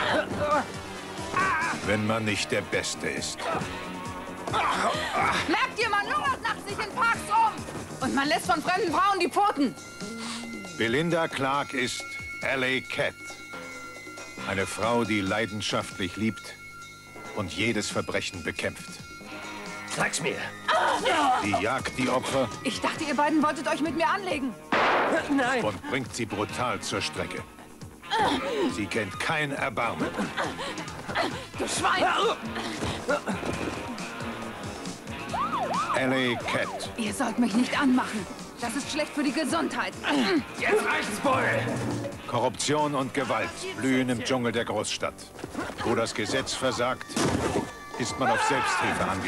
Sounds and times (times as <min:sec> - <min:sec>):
Music: 0:00.0 - 0:49.2.